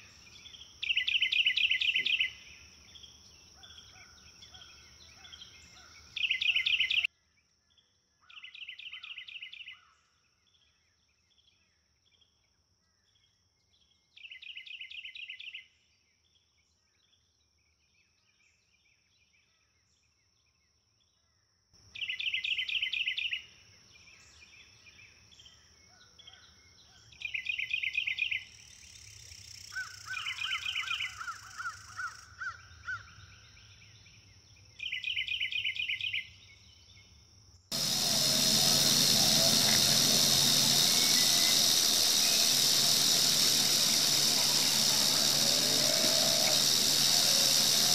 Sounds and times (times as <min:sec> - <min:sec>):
Outside, rural or natural: 0:00.0 - 0:21.2, 0:21.9 - 0:47.9.